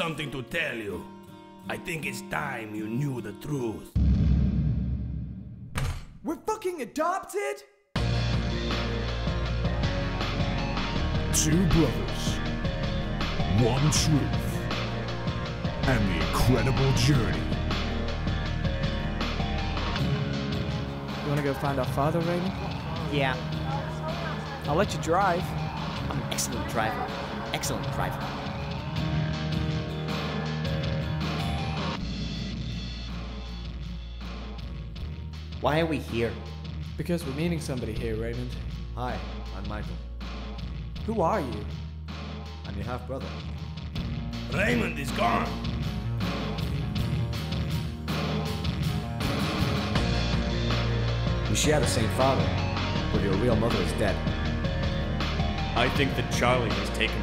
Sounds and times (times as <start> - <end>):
Music: 0.0 - 5.6, 8.0 - 57.2.